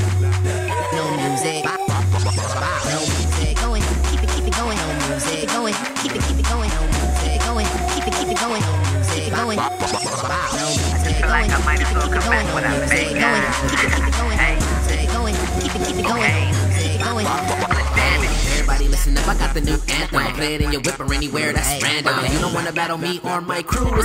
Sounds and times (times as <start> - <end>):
Music: 0.0 - 24.0.